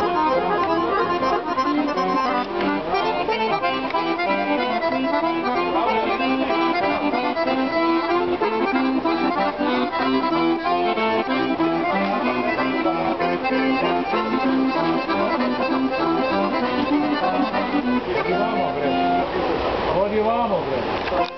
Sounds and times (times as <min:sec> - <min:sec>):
Accordion: 0:00.0 - 0:19.8, 0:21.0 - 0:21.3.